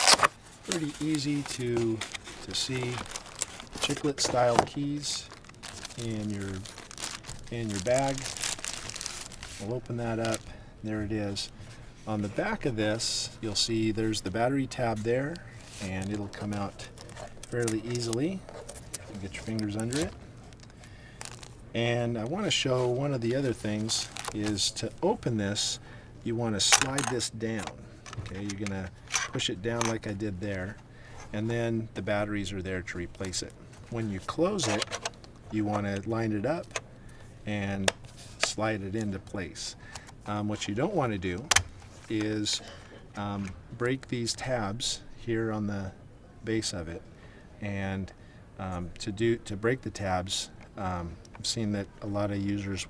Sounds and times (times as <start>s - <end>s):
Speech: 0.7s - 3.1s, 3.8s - 5.3s, 6.0s - 6.7s, 7.5s - 8.3s, 9.6s - 11.5s, 12.1s - 16.9s, 17.5s - 18.4s, 19.1s - 20.2s, 21.8s - 34.9s, 35.5s - 36.8s, 37.5s - 41.5s, 42.1s - 52.9s.